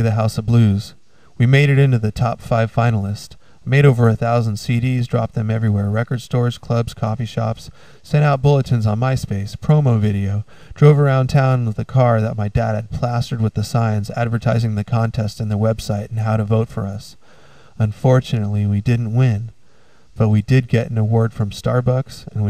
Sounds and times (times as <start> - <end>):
Speech: 0.0 - 17.2, 17.8 - 19.6, 20.2 - 22.5.